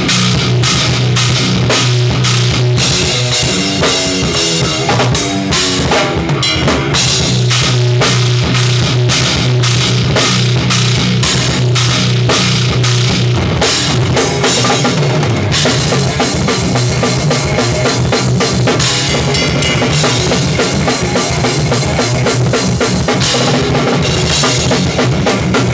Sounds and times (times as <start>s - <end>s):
Heavy metal: 0.0s - 25.7s.